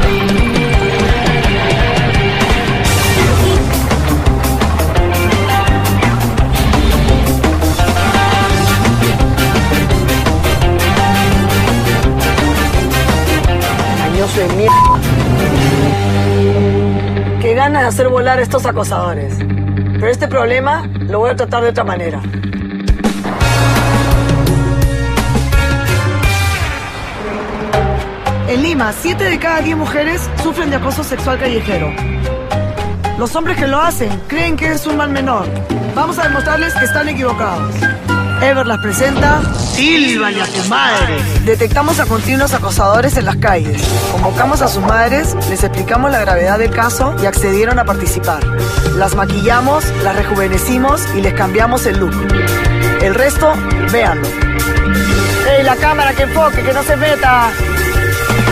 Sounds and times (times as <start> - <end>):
Music: 0.0 - 58.5
Speech: 20.0 - 22.3, 28.5 - 32.0, 33.2 - 37.8, 38.4 - 52.2, 53.0 - 54.2, 55.4 - 57.6.